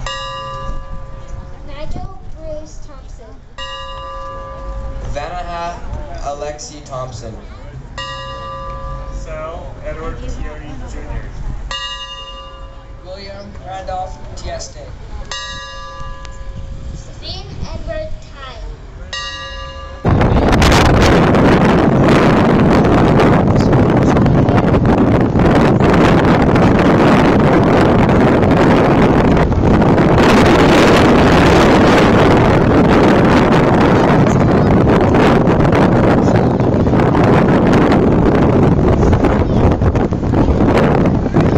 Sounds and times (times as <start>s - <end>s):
Outside, urban or manmade: 0.0s - 41.5s.